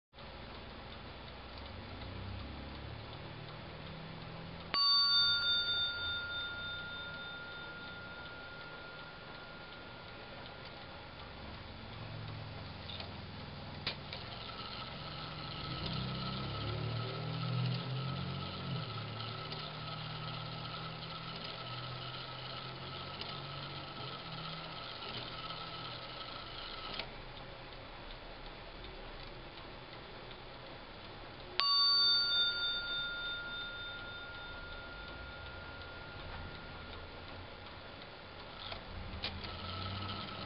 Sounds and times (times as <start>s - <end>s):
Clock: 0.2s - 40.4s
Inside, small room: 0.2s - 40.4s.